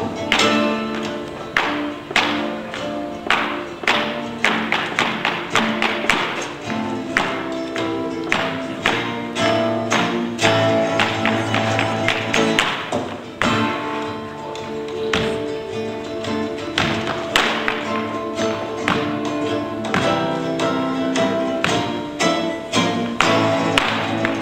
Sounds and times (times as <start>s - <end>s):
Music: 0.0s - 24.4s.